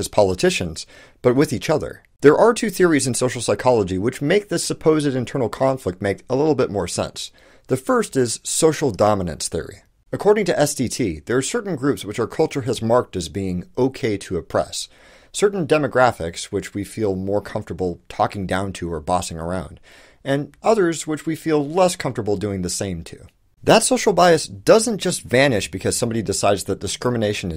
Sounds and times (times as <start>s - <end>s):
Narration, monologue: 0.0s - 27.5s.